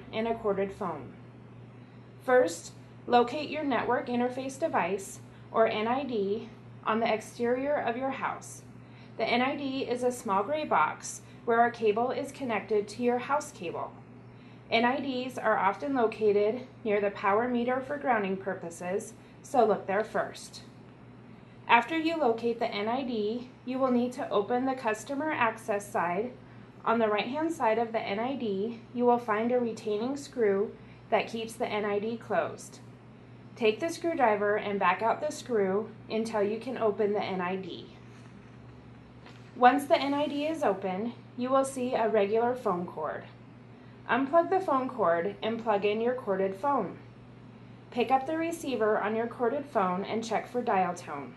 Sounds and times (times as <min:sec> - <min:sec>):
Speech: 0:00.0 - 0:01.2, 0:02.2 - 0:14.0, 0:14.7 - 0:20.8, 0:21.7 - 0:32.9, 0:33.6 - 0:38.0, 0:39.6 - 0:43.4, 0:44.1 - 0:47.1, 0:47.9 - 0:51.3.